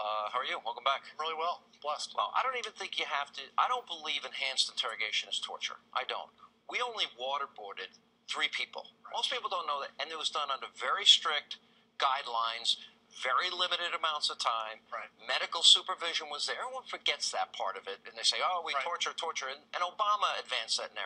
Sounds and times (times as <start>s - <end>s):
Speech: 0.0s - 21.0s.